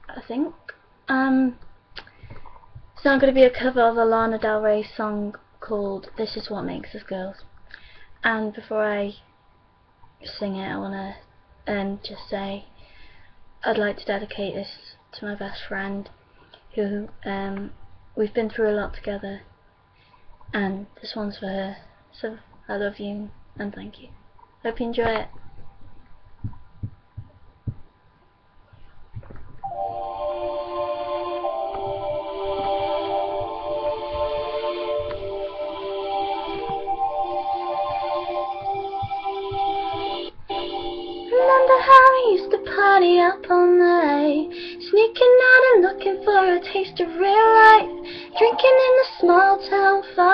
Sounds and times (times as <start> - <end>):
Speech: 0.1 - 1.6, 3.0 - 7.5, 8.2 - 9.3, 10.2 - 12.7, 13.6 - 16.1, 16.8 - 19.5, 20.6 - 25.4
Music: 29.6 - 50.3.